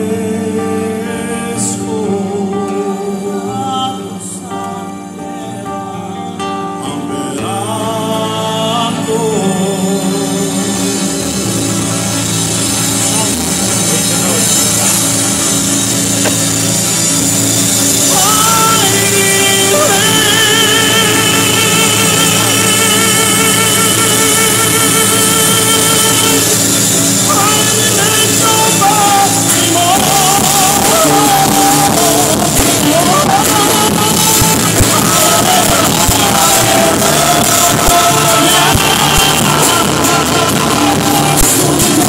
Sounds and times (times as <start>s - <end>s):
Male singing: 0.0s - 11.6s, 17.9s - 42.0s
Choir: 18.1s - 42.0s.